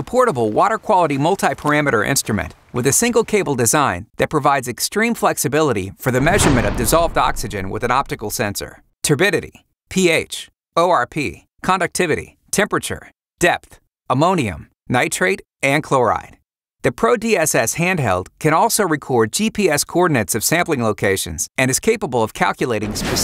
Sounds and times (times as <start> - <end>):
Speech: 0.0 - 23.2.